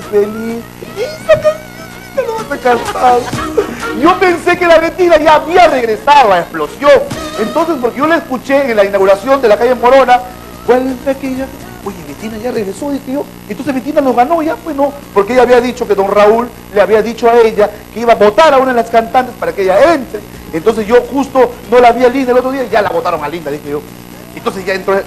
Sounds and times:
Speech: 0.0 - 1.6, 2.2 - 3.3, 4.0 - 25.0.

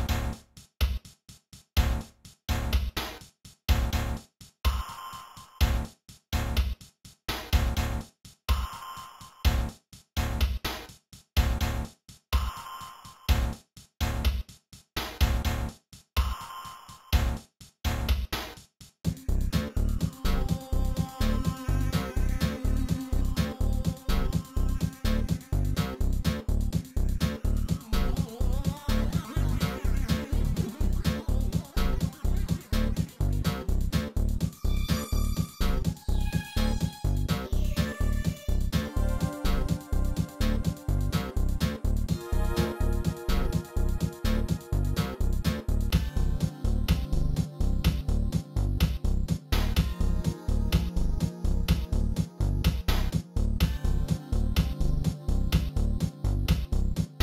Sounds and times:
Background music: 19.1 - 57.2.

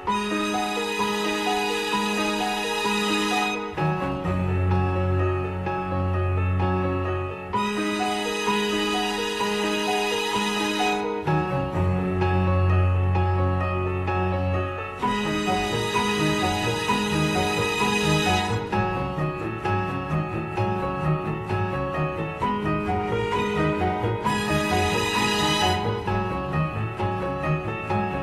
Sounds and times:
Tender music: 0.0 - 28.2.

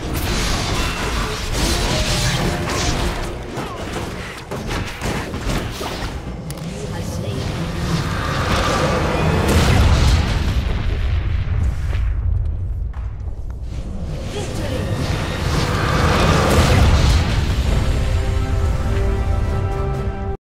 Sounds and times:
Speech: 6.7 - 7.6, 14.3 - 14.9
Music: 13.8 - 20.4.

